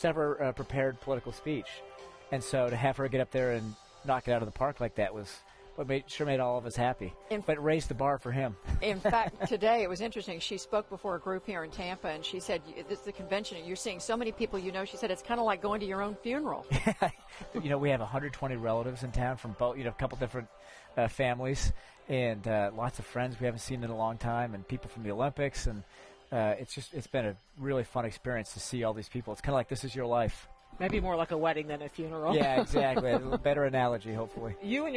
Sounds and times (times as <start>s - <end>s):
Male speech, man speaking: 0.0s - 9.0s, 17.6s - 34.9s
Conversation: 0.0s - 34.9s
Music: 0.0s - 34.9s
Narration, monologue: 0.0s - 34.9s.